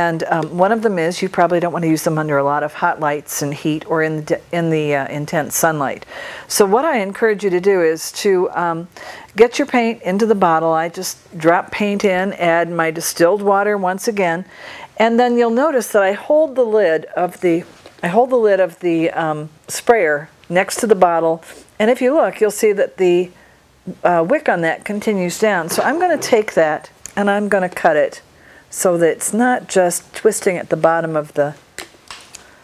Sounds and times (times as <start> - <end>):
Speech: 0.0 - 31.6.